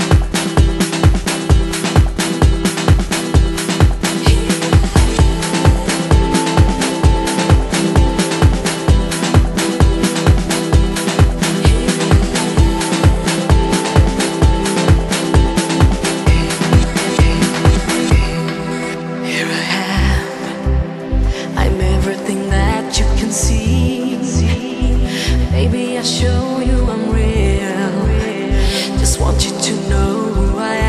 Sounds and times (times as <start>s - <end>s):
Music: 0.0s - 30.8s.